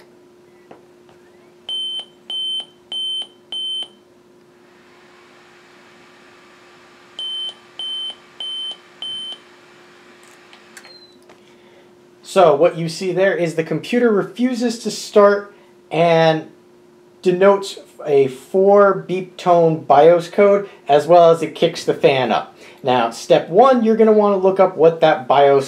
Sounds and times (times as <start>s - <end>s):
Beep, bleep: 1.7s - 4.0s, 7.2s - 9.4s
Speech: 12.2s - 16.6s, 17.2s - 25.6s.